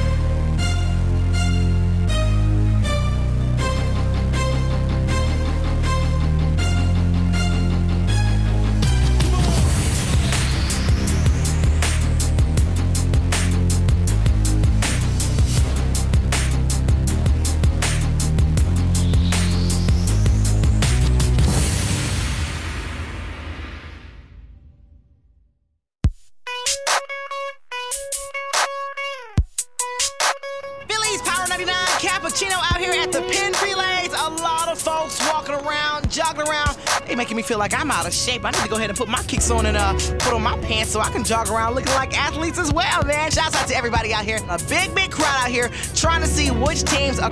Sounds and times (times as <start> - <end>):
Music: 0.0 - 23.9, 26.0 - 47.3.